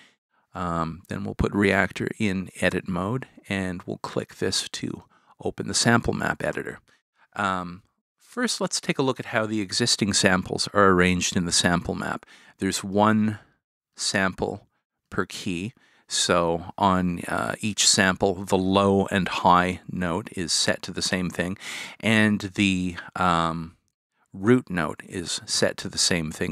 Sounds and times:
Speech: 0.6 - 23.8, 24.4 - 26.5.

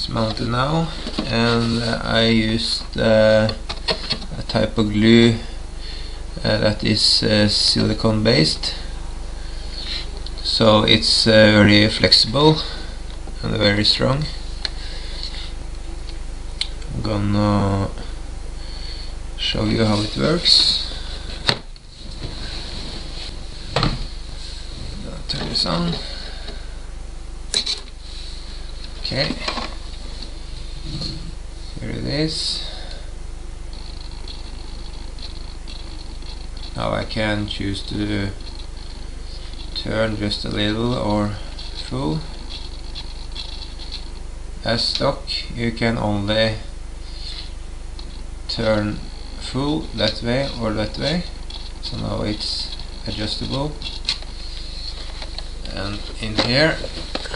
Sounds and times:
Speech: 0.0 - 3.6, 4.3 - 5.5, 6.4 - 8.9, 10.4 - 12.8, 13.4 - 14.4, 16.9 - 18.1, 19.4 - 20.9, 25.0 - 26.2, 29.0 - 29.6, 31.8 - 32.9, 36.8 - 38.4, 39.8 - 42.3, 44.6 - 46.7, 48.5 - 53.8, 55.7 - 57.3.

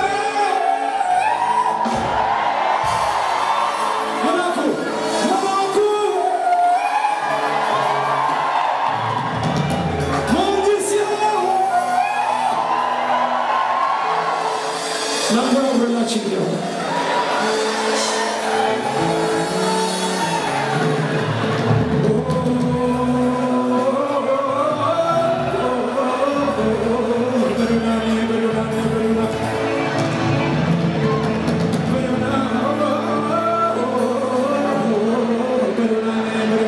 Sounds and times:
Music: 0.0 - 36.6
Speech: 15.3 - 16.7.

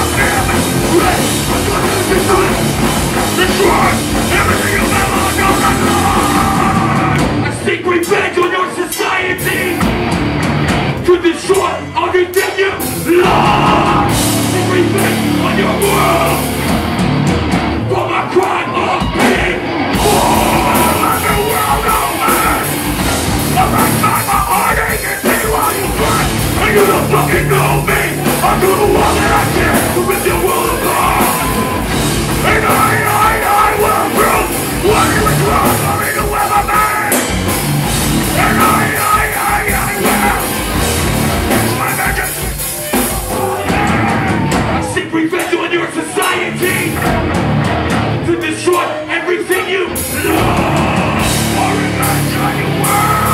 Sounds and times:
Singing: 0.0 - 9.8, 11.0 - 16.6, 17.8 - 37.4, 38.2 - 47.2, 48.2 - 53.3
Music: 0.0 - 53.3.

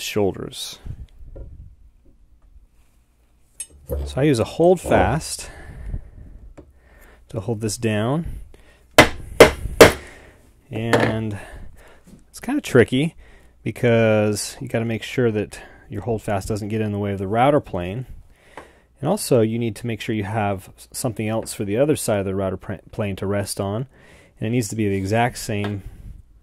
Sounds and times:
Hammer: 9.0 - 10.0.

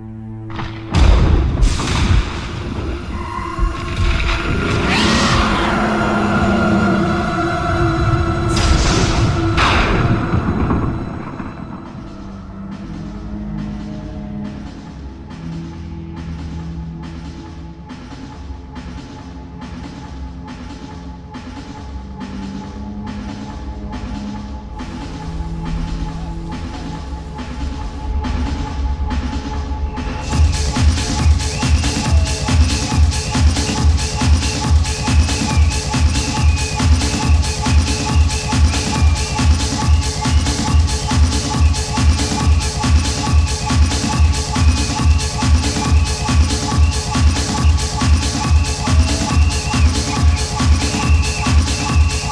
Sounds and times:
Music: 0.0 - 52.3.

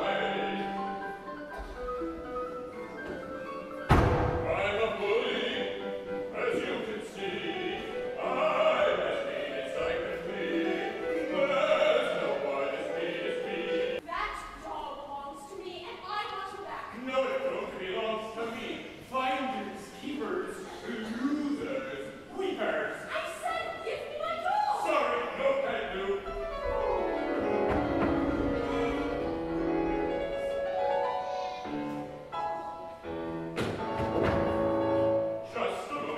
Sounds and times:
Opera: 0.0 - 36.1.

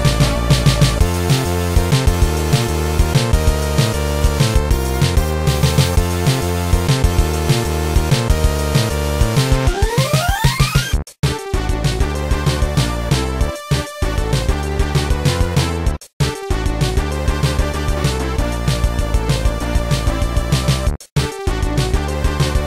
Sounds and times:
Music: 0.0 - 22.6.

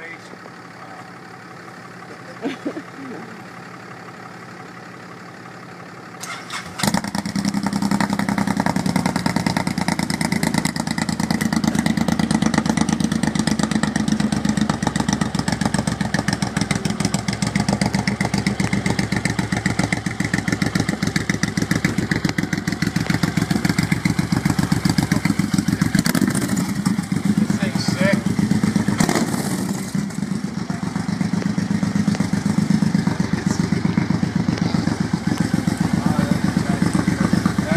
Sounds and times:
Speech: 0.0 - 1.1, 27.5 - 28.3, 35.9 - 37.0, 37.6 - 37.7
Vehicle: 0.0 - 37.7.

